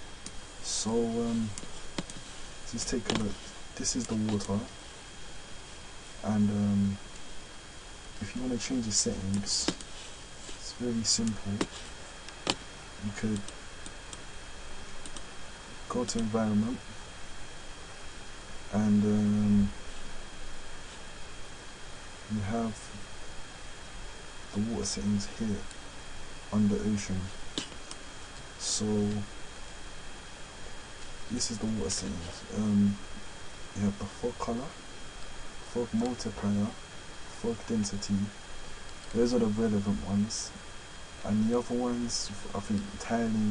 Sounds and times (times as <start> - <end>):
Speech: 0.6 - 1.6, 2.7 - 4.8, 6.2 - 7.0, 8.2 - 9.8, 10.6 - 11.7, 13.0 - 13.5, 15.9 - 16.9, 18.7 - 19.8, 22.3 - 23.0, 24.5 - 25.7, 26.5 - 27.4, 28.6 - 29.3, 31.3 - 33.1, 33.8 - 34.8, 35.7 - 38.4, 39.1 - 40.6, 41.2 - 43.5.